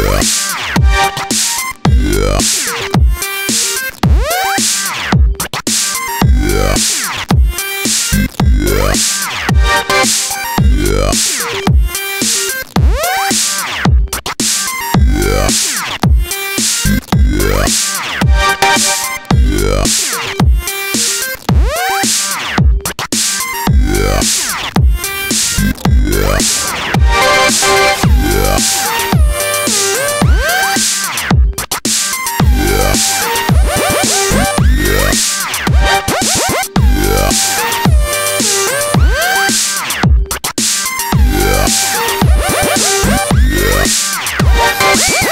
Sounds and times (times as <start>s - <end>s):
Dubstep: 0.0s - 45.3s.